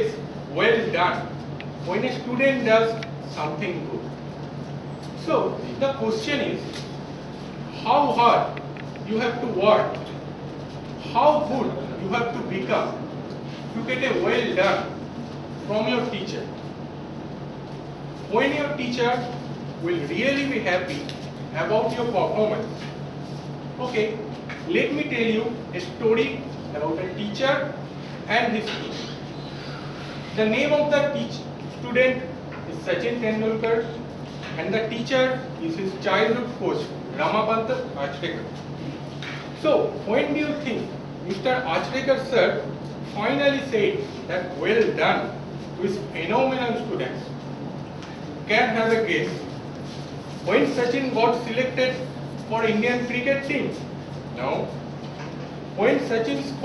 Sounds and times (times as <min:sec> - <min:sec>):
Male speech, man speaking: 0:00.0 - 0:01.3, 0:01.9 - 0:04.1, 0:05.2 - 0:06.7, 0:07.8 - 0:10.0, 0:11.0 - 0:13.0, 0:13.8 - 0:15.0, 0:15.7 - 0:16.5, 0:18.3 - 0:22.7, 0:23.8 - 0:29.1, 0:30.4 - 0:34.0, 0:34.6 - 0:38.5, 0:39.6 - 0:47.3, 0:48.5 - 0:49.5, 0:50.5 - 0:53.8, 0:54.4 - 0:54.8, 0:55.8 - 0:56.6
Narration, monologue: 0:00.0 - 0:56.6.